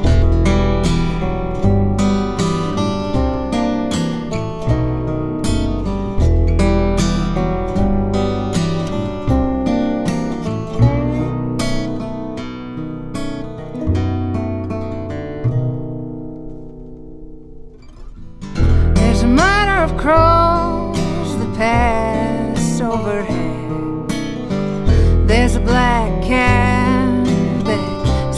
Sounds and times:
Music: 0.0s - 28.3s.

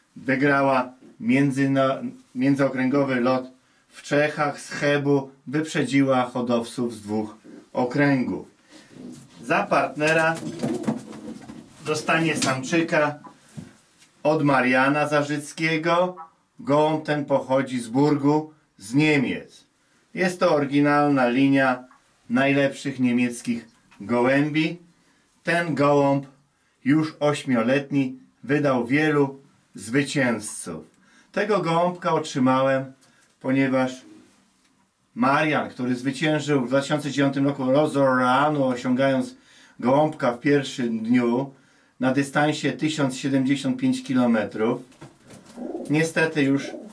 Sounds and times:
Speech: 0.2s - 8.6s, 9.4s - 10.6s, 11.8s - 13.3s, 14.2s - 34.2s, 35.2s - 44.9s, 45.8s - 46.9s.

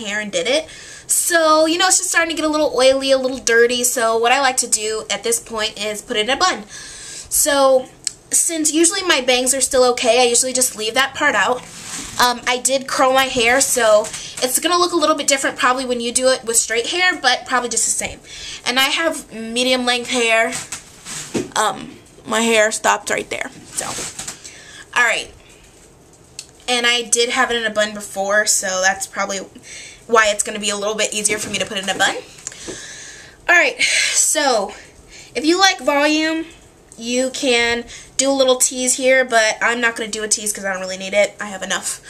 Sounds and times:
Speech: 0.0s - 6.7s, 7.3s - 11.6s, 12.2s - 20.7s, 21.6s - 24.1s, 25.0s - 25.4s, 26.7s - 29.5s, 30.1s - 32.3s, 33.5s - 34.8s, 35.4s - 42.0s.

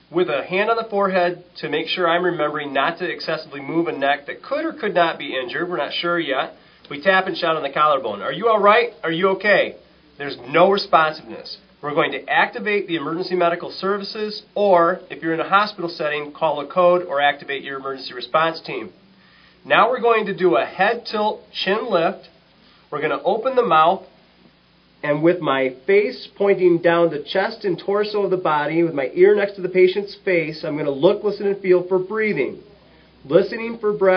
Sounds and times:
Speech: 0.1s - 19.0s, 19.6s - 24.1s, 25.0s - 34.1s.

